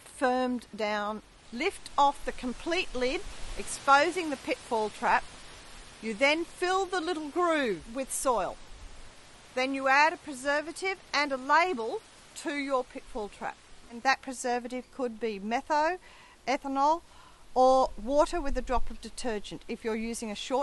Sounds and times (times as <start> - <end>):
Speech: 0.1 - 5.2, 6.0 - 8.6, 9.6 - 17.0, 17.6 - 20.6.